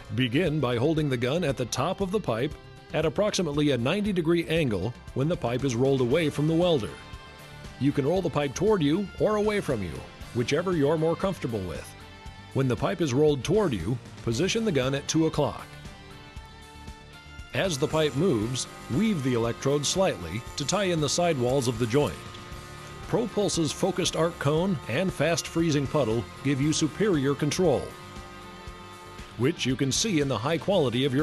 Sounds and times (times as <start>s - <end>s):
Music: 0.0s - 31.2s
Speech: 0.1s - 7.0s, 7.8s - 11.9s, 12.6s - 15.7s, 17.6s - 22.2s, 23.1s - 27.9s, 29.4s - 31.2s.